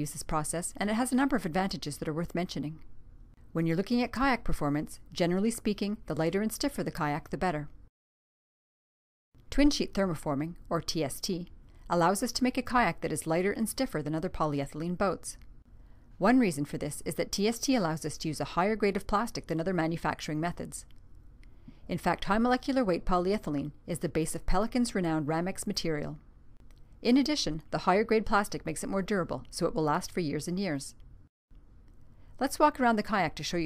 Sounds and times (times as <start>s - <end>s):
Speech: 0.0s - 2.8s, 3.6s - 7.8s, 9.5s - 15.4s, 16.2s - 20.9s, 21.9s - 26.2s, 27.0s - 31.0s, 32.4s - 33.6s.